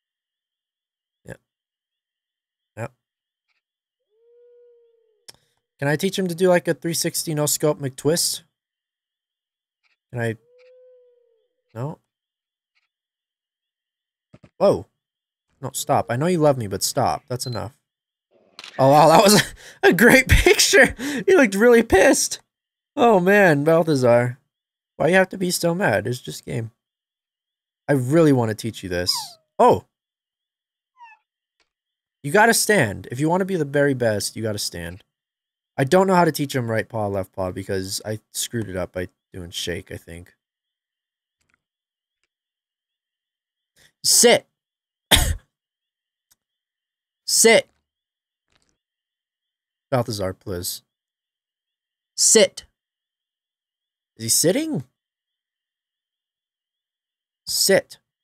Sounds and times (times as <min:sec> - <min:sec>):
Speech: 0:05.8 - 0:08.5, 0:10.2 - 0:10.4, 0:11.8 - 0:12.0, 0:14.6 - 0:14.9, 0:15.6 - 0:17.8, 0:18.8 - 0:22.4, 0:23.0 - 0:24.4, 0:25.0 - 0:26.8, 0:27.9 - 0:29.9, 0:32.3 - 0:35.0, 0:35.8 - 0:40.4, 0:44.0 - 0:44.5, 0:47.3 - 0:47.7, 0:50.0 - 0:50.8, 0:52.2 - 0:52.7, 0:54.2 - 0:54.9, 0:57.5 - 0:58.0.